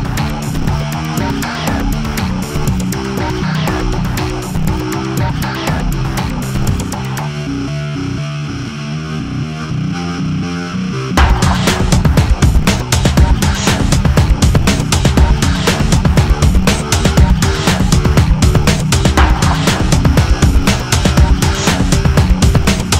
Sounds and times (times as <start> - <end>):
Music: 0.0 - 23.0
Sound effect: 0.0 - 23.0.